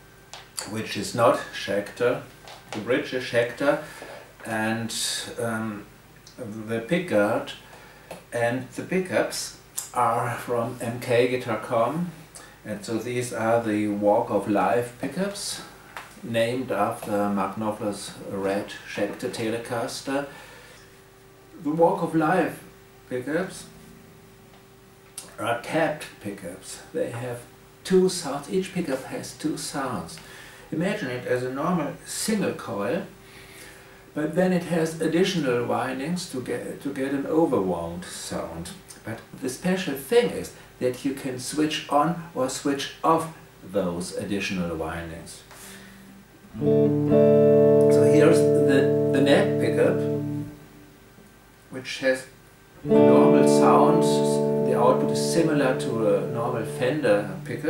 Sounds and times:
Speech: 0.6 - 7.6, 8.3 - 20.3, 21.6 - 23.8, 25.2 - 33.2, 34.2 - 45.6, 47.9 - 50.2, 51.7 - 57.7.

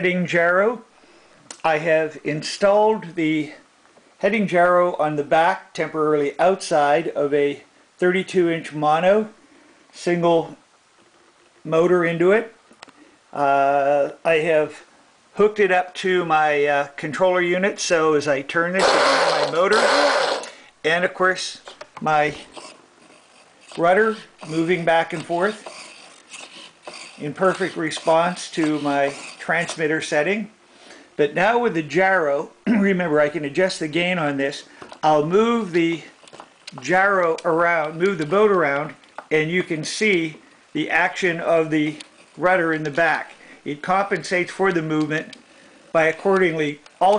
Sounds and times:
Speech: 0.0 - 0.9, 1.6 - 9.4, 10.0 - 10.6, 11.6 - 12.6, 13.4 - 22.5, 23.7 - 25.7, 27.2 - 30.6, 31.2 - 47.1.

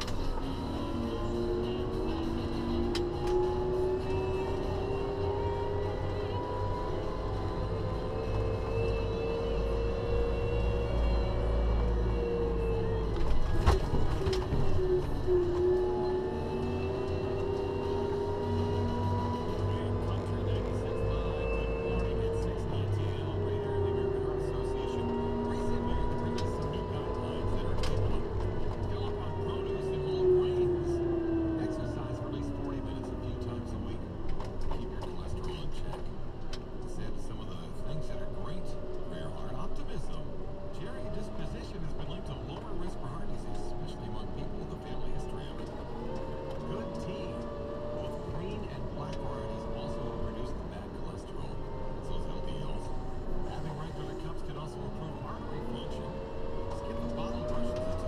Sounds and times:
Speech: 0.0 - 7.1, 15.8 - 36.1, 36.8 - 58.0.

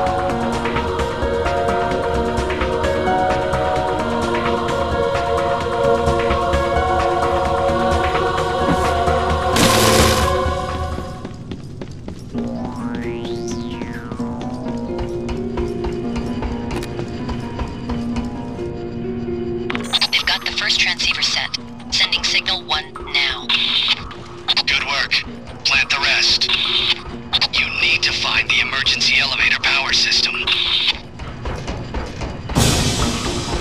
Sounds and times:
Music: 0.0 - 33.6
Speech: 20.0 - 31.0.

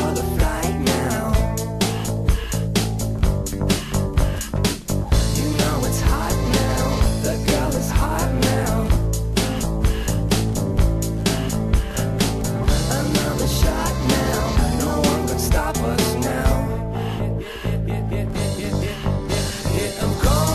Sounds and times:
Music: 0.0 - 20.5.

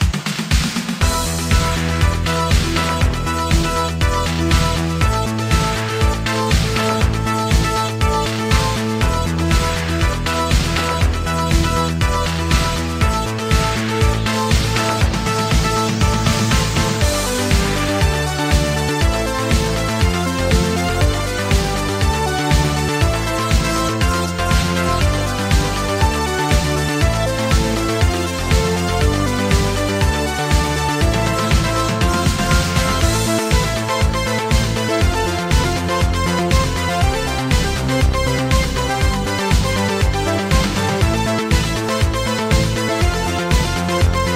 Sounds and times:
Music: 0.0 - 44.3.

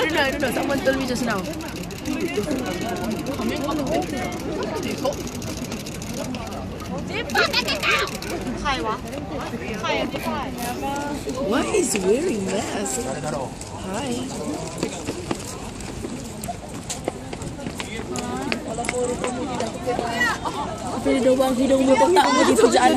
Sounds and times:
Speech: 8.4 - 22.9.

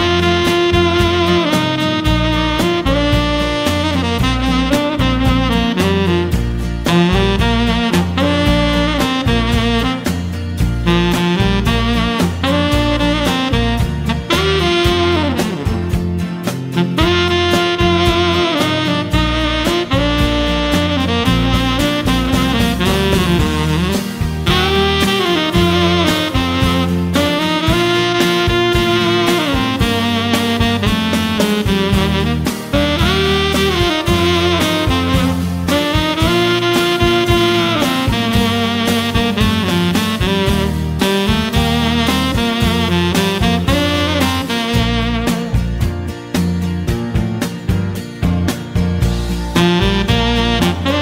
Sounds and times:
Music: 0.0 - 51.0.

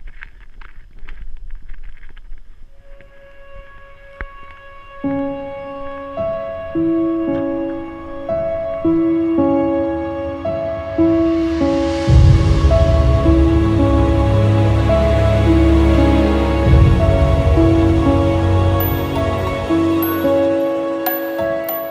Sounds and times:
Music: 2.7 - 21.9.

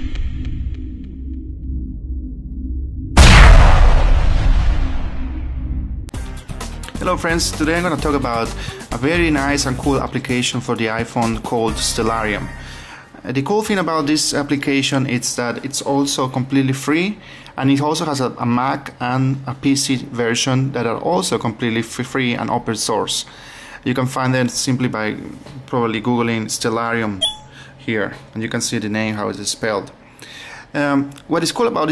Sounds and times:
Speech: 7.0 - 12.6, 13.2 - 27.2, 27.8 - 30.0, 30.7 - 31.9.

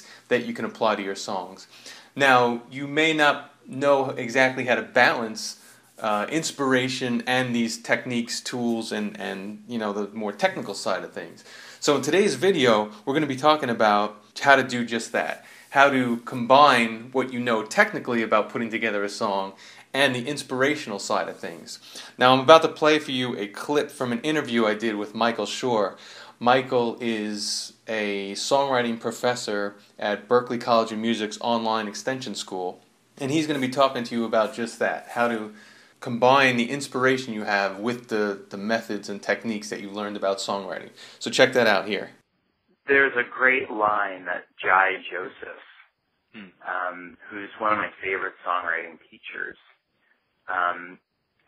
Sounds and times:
Speech: 0.0 - 42.2, 42.9 - 49.8, 50.5 - 51.0.

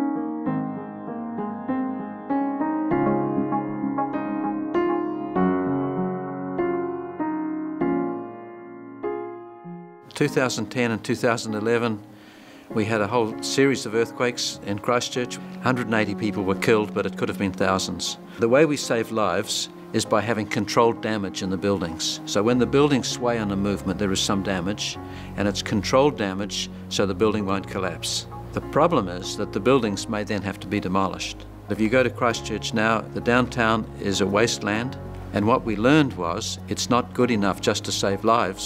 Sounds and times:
Music: 0.0 - 38.6
Speech: 10.1 - 12.0, 12.7 - 38.6.

